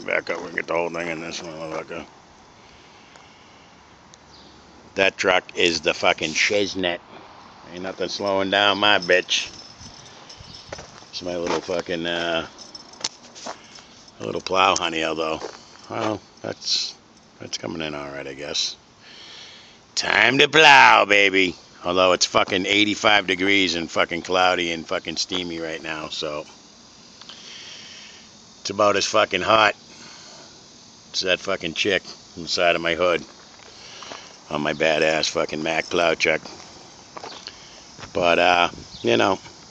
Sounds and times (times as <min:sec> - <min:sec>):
Speech: 0:00.0 - 0:02.1, 0:05.0 - 0:07.0, 0:07.7 - 0:09.5, 0:11.2 - 0:12.5, 0:14.2 - 0:18.8, 0:20.0 - 0:26.5, 0:28.6 - 0:29.8, 0:31.2 - 0:33.3, 0:34.5 - 0:36.5, 0:38.1 - 0:39.5.